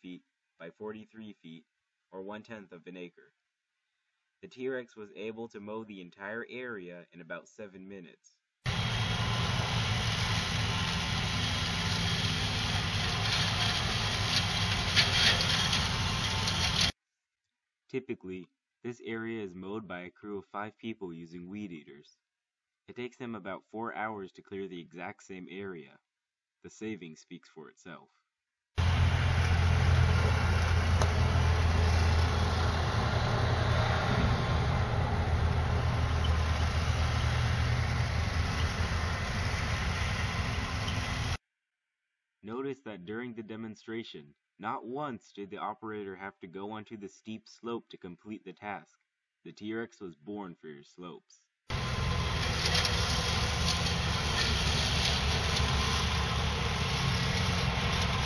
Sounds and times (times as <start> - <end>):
Speech: 0.0 - 1.6, 2.2 - 3.3, 4.4 - 8.4, 17.9 - 22.2, 22.9 - 26.0, 26.6 - 28.2, 42.4 - 51.5
Outside, rural or natural: 8.7 - 17.0, 28.8 - 41.4, 51.7 - 58.2
Vehicle: 8.7 - 17.0, 28.8 - 41.4, 51.7 - 58.2.